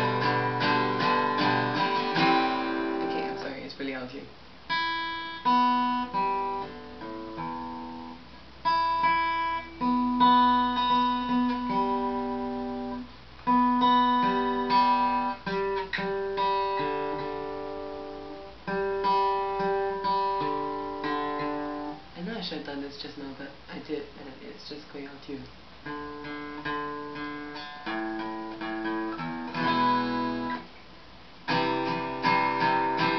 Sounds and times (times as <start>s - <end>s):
Guitar: 0.0s - 33.1s
Speech: 3.0s - 4.4s, 22.1s - 25.6s.